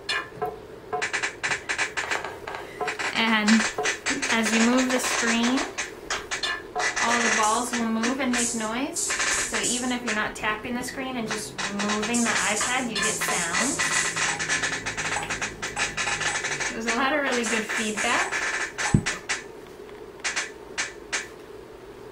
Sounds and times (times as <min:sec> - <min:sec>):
Speech: 0:03.2 - 0:03.6, 0:04.2 - 0:05.7, 0:07.0 - 0:13.8, 0:16.7 - 0:18.3.